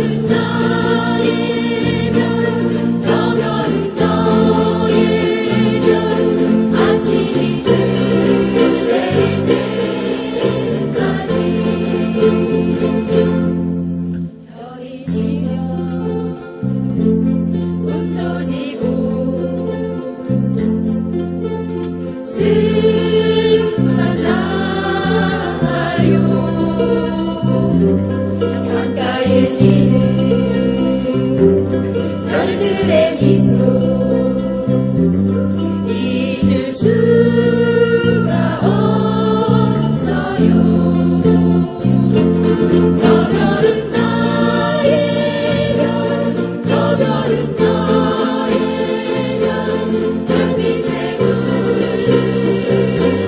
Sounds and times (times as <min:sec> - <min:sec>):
Singing: 0:00.0 - 0:13.4, 0:14.5 - 0:17.1, 0:17.8 - 0:20.8, 0:22.3 - 0:35.2, 0:35.8 - 0:53.2
Inside, large room or hall: 0:00.0 - 0:53.2
Ukulele: 0:00.0 - 0:53.2.